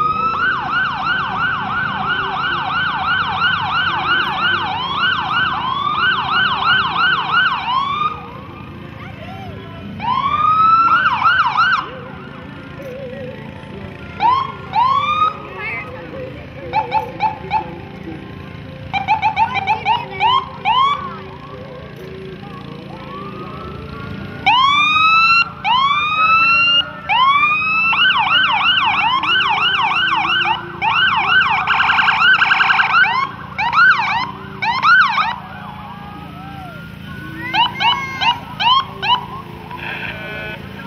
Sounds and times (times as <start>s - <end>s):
Music: 11.8s - 24.6s.